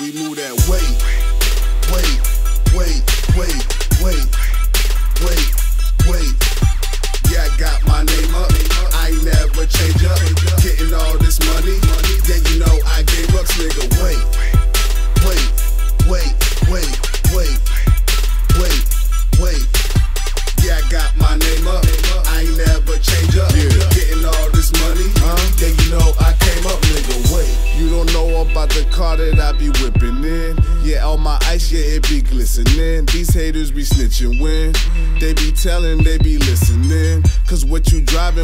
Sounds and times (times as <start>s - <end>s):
Disco: 0.0s - 31.7s.